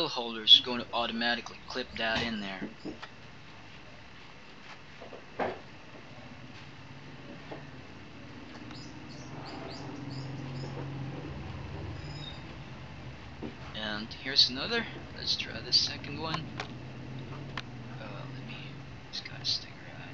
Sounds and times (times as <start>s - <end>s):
Speech: 0.0s - 2.8s, 13.8s - 16.4s, 18.0s - 20.1s.